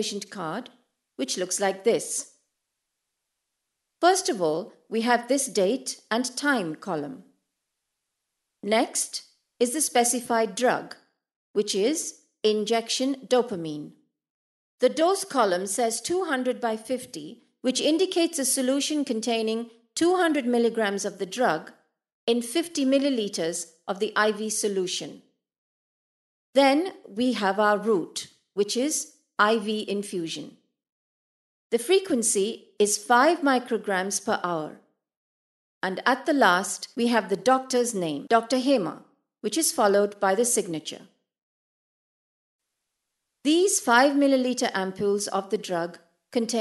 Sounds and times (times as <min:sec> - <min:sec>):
Speech: 0:00.0 - 0:02.3, 0:04.0 - 0:07.3, 0:08.6 - 0:11.0, 0:11.6 - 0:14.0, 0:14.8 - 0:21.7, 0:22.3 - 0:25.2, 0:26.6 - 0:30.6, 0:31.8 - 0:34.8, 0:35.8 - 0:41.1, 0:43.5 - 0:46.6.